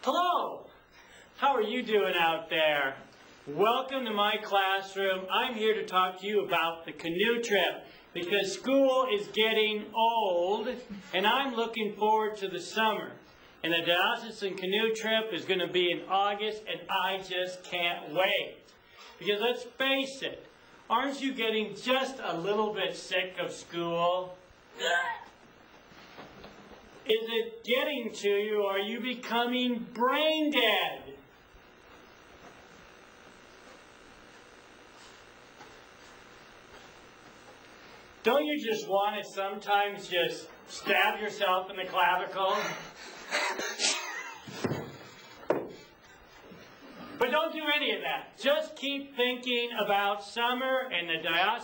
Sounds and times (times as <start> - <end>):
Speech: 0.0 - 0.7, 1.4 - 25.1, 27.1 - 31.2, 38.2 - 42.9, 47.2 - 51.6.